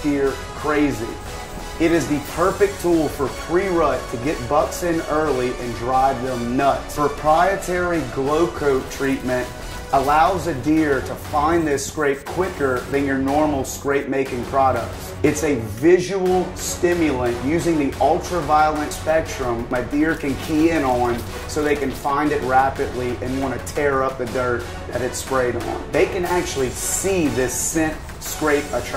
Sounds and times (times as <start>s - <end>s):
Speech: 0.0s - 1.2s, 1.8s - 28.9s
Music: 0.0s - 28.9s.